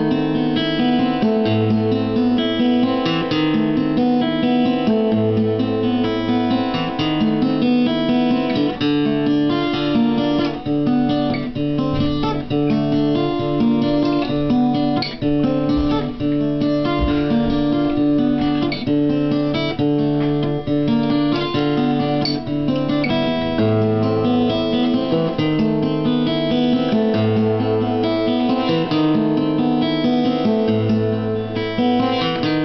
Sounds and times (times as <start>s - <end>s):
Acoustic guitar: 0.0s - 32.6s
Strum: 0.0s - 32.6s.